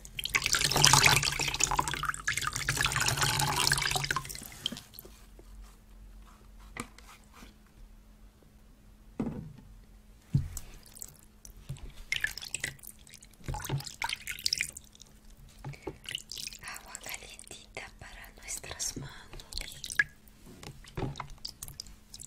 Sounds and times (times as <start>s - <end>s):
Water: 0.0s - 5.1s, 10.3s - 17.5s, 18.8s - 22.2s.